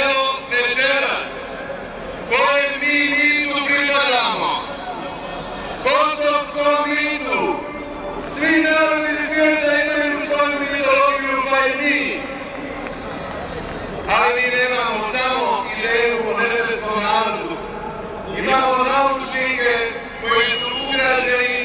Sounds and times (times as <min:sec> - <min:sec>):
Male speech, man speaking: 0:00.0 - 0:01.6, 0:02.3 - 0:04.7, 0:05.8 - 0:07.6, 0:08.2 - 0:12.3, 0:14.1 - 0:17.6, 0:18.3 - 0:21.6
Narration, monologue: 0:00.0 - 0:04.8, 0:05.8 - 0:12.5, 0:14.1 - 0:21.6.